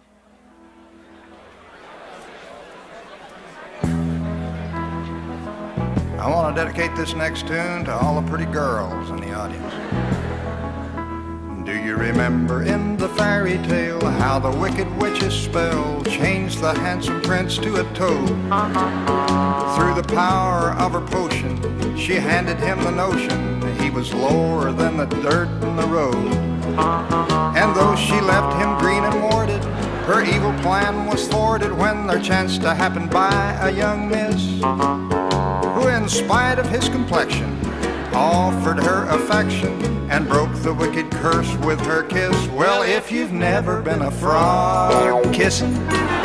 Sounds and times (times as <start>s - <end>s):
Music: 0.0s - 1.6s, 3.8s - 46.2s
Speech: 6.1s - 9.8s, 11.5s - 18.3s, 19.8s - 26.4s, 27.6s - 34.5s, 35.8s - 37.6s, 38.2s - 45.8s.